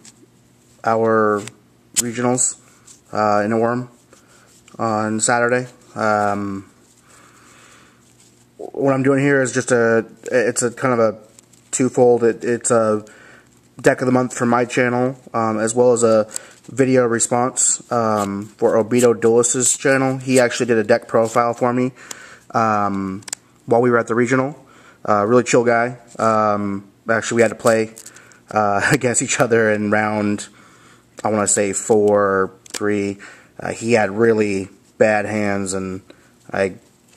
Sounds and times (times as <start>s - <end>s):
Speech: 0.8s - 4.0s, 4.8s - 6.8s, 8.6s - 13.1s, 13.8s - 30.6s, 31.2s - 36.8s.